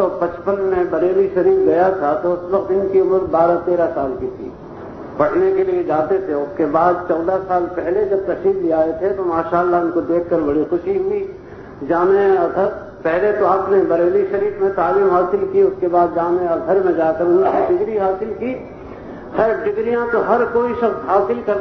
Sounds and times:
Male speech, man speaking: 0.0 - 4.5, 5.2 - 18.7, 19.4 - 21.6
Narration, monologue: 0.0 - 21.6.

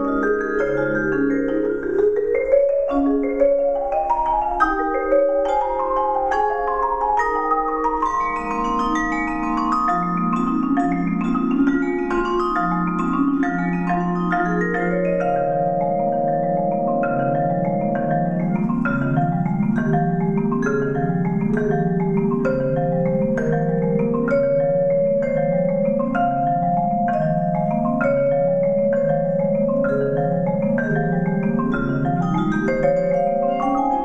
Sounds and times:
Glockenspiel: 0.0 - 34.0
Marimba, xylophone: 0.0 - 34.0.

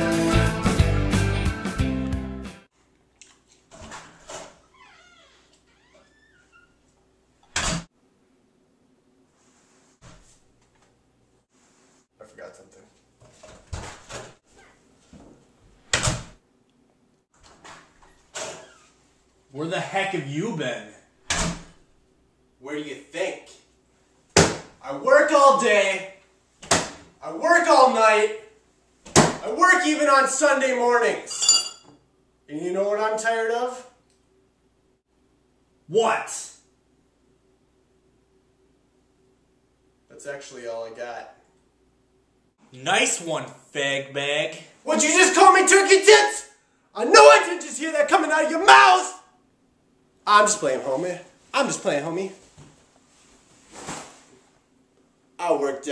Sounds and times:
Inside, small room: 0.0 - 55.9
Speech: 12.2 - 13.0, 19.5 - 21.0, 22.6 - 23.7, 24.8 - 26.2, 27.2 - 28.6, 29.4 - 31.3, 32.5 - 34.0, 35.9 - 36.7, 40.1 - 41.4, 42.7 - 49.3, 50.2 - 52.4, 55.4 - 55.9.

